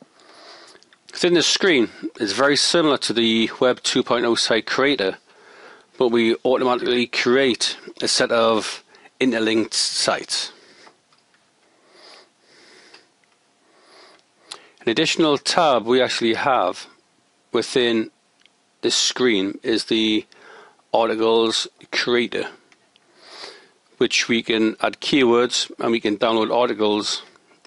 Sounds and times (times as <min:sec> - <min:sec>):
Speech: 0:01.1 - 0:05.2, 0:06.0 - 0:10.6, 0:14.8 - 0:16.9, 0:17.5 - 0:18.1, 0:18.8 - 0:20.3, 0:20.9 - 0:22.6, 0:24.0 - 0:27.4.